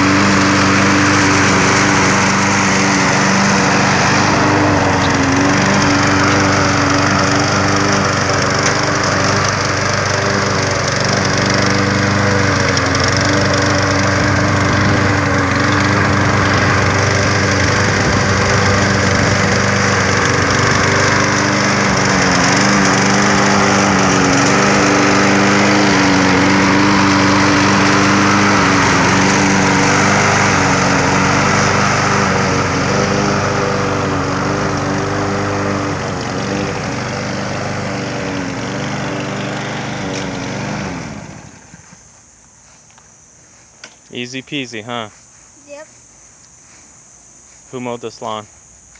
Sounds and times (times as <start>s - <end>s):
Lawn mower: 0.0s - 48.9s.